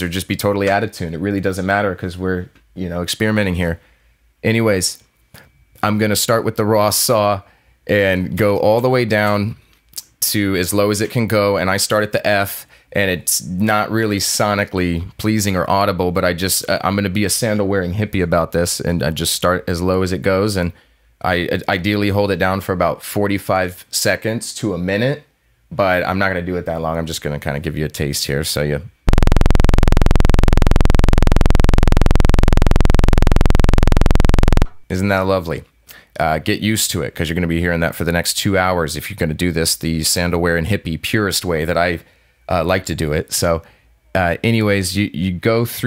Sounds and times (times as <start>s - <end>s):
Speech: 0.0s - 3.8s, 4.4s - 5.1s, 5.8s - 29.0s, 34.9s - 45.8s.